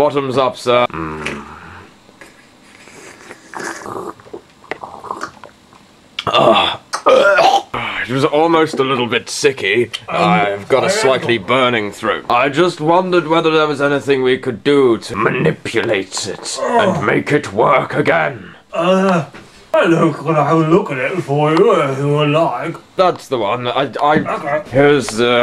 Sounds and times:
Speech: 0.0s - 1.5s, 7.8s - 25.4s.

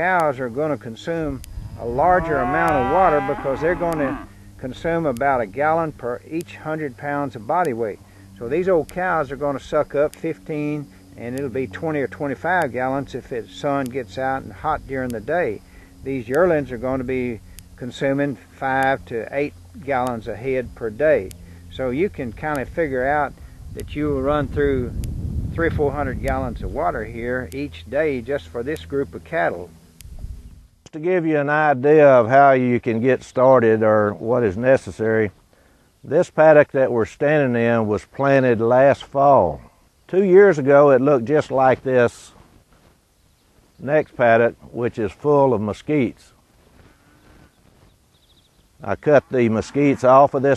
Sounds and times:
Speech: 0.0s - 24.9s, 25.6s - 29.7s, 30.9s - 35.3s, 36.1s - 42.4s, 43.8s - 46.3s, 48.8s - 50.5s
Outside, rural or natural: 0.0s - 50.5s.

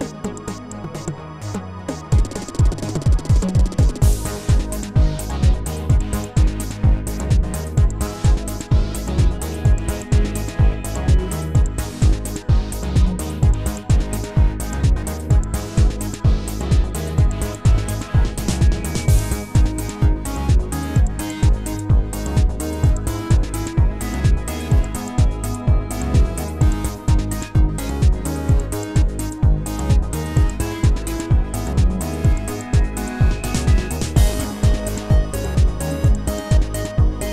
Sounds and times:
Music: 0.0s - 37.3s.

